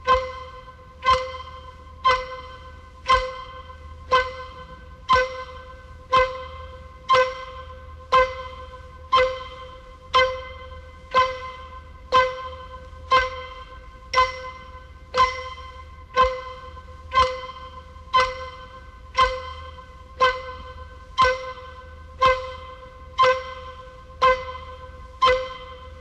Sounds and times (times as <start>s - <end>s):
Tick-tock: 0.0s - 26.0s.